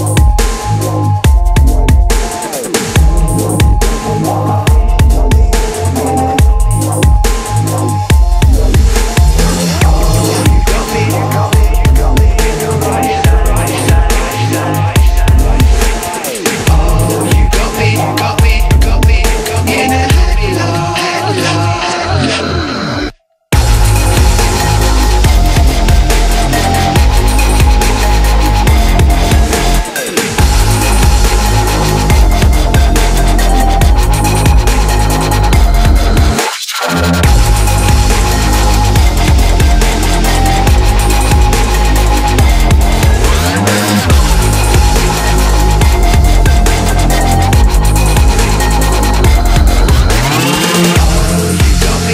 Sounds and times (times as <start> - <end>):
Dubstep: 0.0 - 52.1.